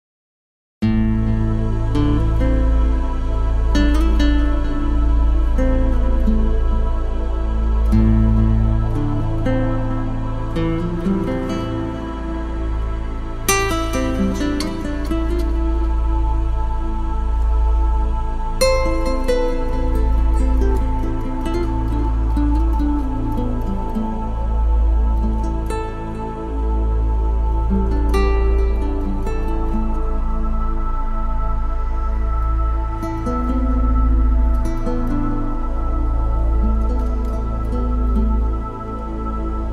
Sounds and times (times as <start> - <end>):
New-age music: 0.8 - 39.7.